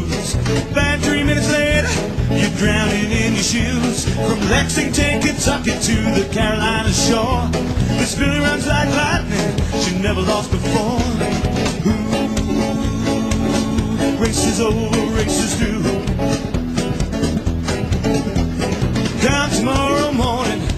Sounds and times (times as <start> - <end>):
Music: 0.0 - 20.7.